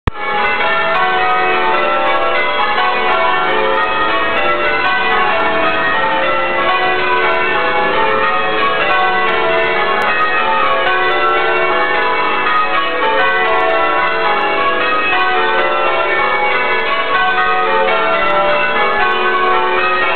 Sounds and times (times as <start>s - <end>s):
Change ringing (campanology): 0.1s - 20.1s.